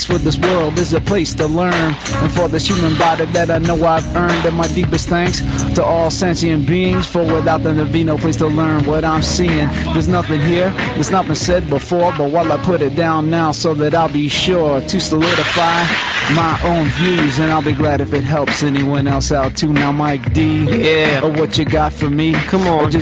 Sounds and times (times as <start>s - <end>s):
Music: 0.0s - 23.0s
Speech: 0.0s - 23.0s
Radio: 9.8s - 11.2s, 15.2s - 17.8s.